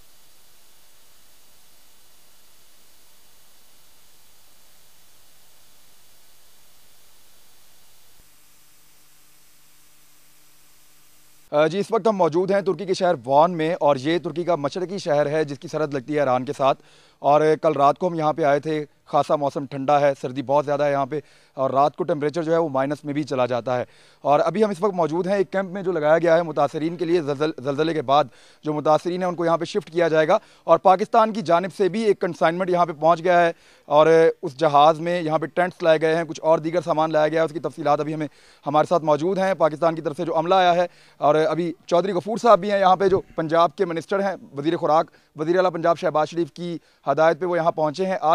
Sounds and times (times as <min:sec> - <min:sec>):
Speech: 0:11.5 - 0:48.3.